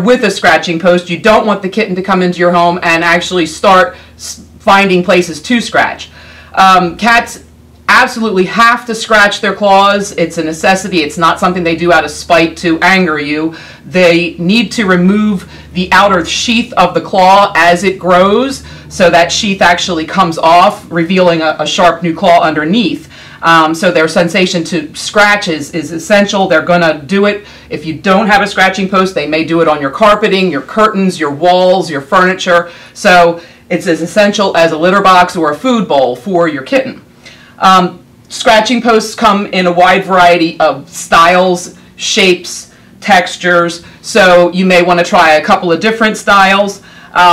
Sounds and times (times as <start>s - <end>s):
Speech: 0.0s - 37.0s, 37.6s - 47.3s.